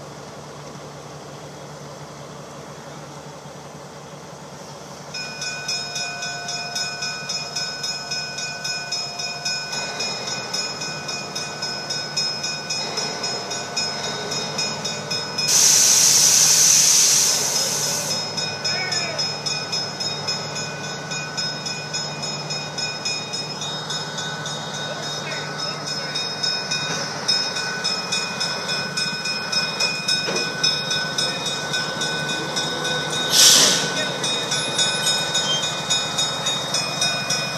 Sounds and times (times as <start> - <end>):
Railroad car, train wagon: 0.0 - 37.5
Steam: 0.0 - 37.5
Train: 0.0 - 37.5.